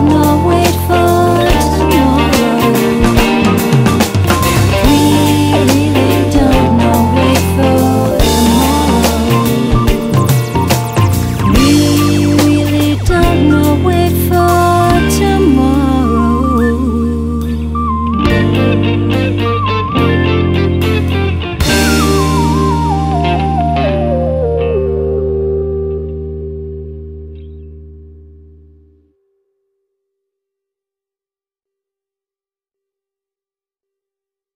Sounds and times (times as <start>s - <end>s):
Electric guitar: 0.0s - 29.1s.